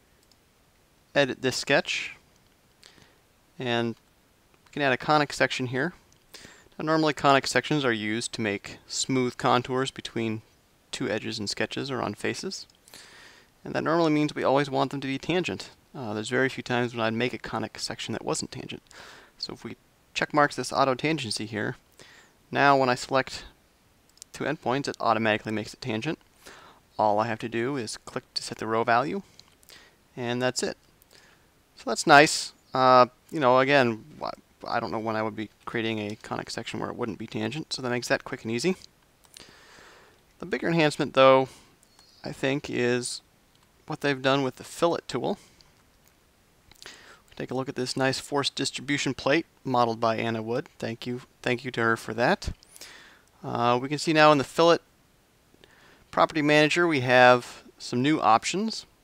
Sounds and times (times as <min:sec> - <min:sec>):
Speech: 0:01.1 - 0:02.2, 0:03.6 - 0:04.0, 0:04.7 - 0:06.0, 0:06.8 - 0:12.7, 0:13.6 - 0:18.8, 0:19.4 - 0:21.8, 0:22.5 - 0:23.6, 0:24.3 - 0:26.2, 0:27.0 - 0:29.3, 0:30.2 - 0:30.8, 0:31.8 - 0:38.9, 0:40.4 - 0:41.6, 0:42.2 - 0:43.2, 0:43.9 - 0:45.5, 0:47.4 - 0:52.6, 0:53.4 - 0:54.8, 0:56.1 - 0:58.9.